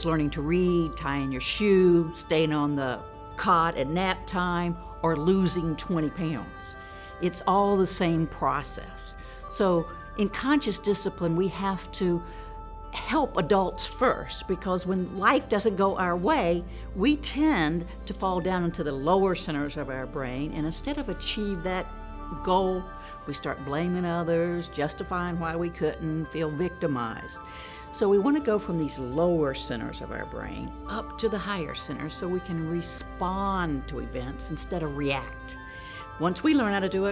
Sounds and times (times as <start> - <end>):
Speech: 0.0 - 12.2, 28.0 - 35.3
Music: 0.0 - 37.1.